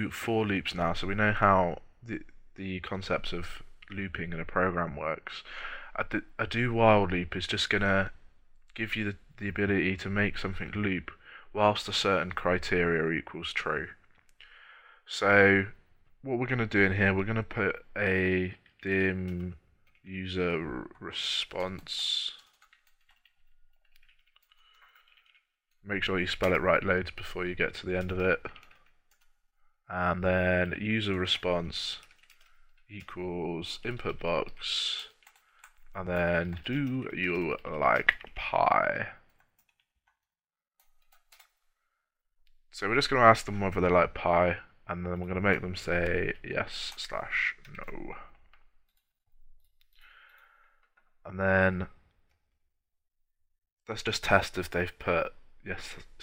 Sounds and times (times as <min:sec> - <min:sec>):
Computer keyboard: 0:21.5 - 0:25.5, 0:27.9 - 0:29.3, 0:31.1 - 0:33.2, 0:33.9 - 0:38.4, 0:39.3 - 0:39.9, 0:40.8 - 0:41.6.